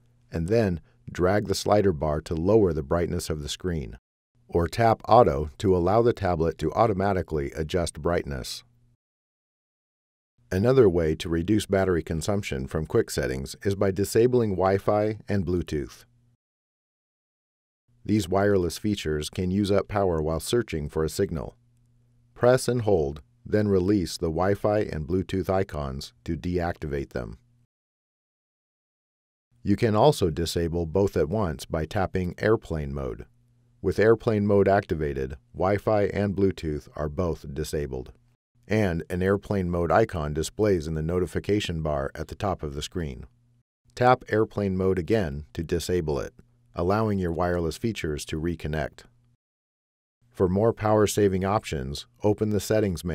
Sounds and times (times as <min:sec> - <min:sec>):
Speech: 0:00.3 - 0:08.7, 0:10.5 - 0:16.1, 0:18.1 - 0:21.6, 0:22.4 - 0:27.4, 0:29.6 - 0:43.3, 0:44.0 - 0:49.1, 0:50.4 - 0:53.1.